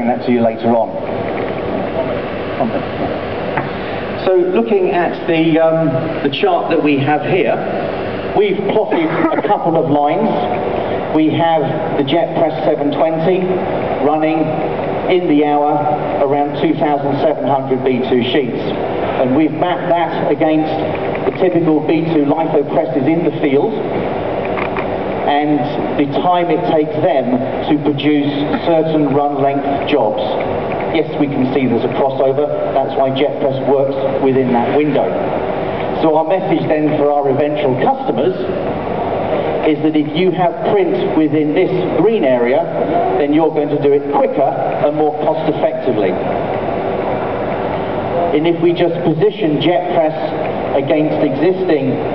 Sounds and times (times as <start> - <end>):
Speech: 0.0 - 1.1, 4.2 - 7.7, 8.4 - 23.9, 25.3 - 35.2, 36.0 - 38.5, 39.6 - 46.3, 48.2 - 52.1.